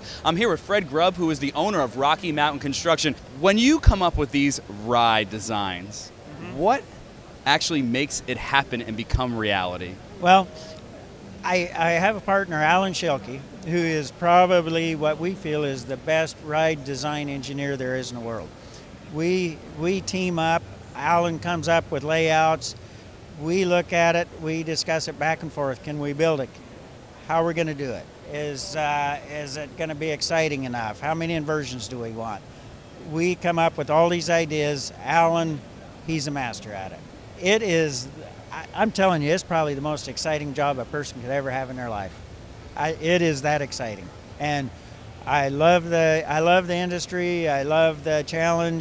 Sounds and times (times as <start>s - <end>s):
Speech: 0.0s - 6.8s, 7.5s - 10.8s, 11.4s - 18.5s, 19.1s - 22.8s, 23.4s - 26.6s, 27.2s - 32.4s, 33.1s - 42.2s, 42.8s - 48.8s.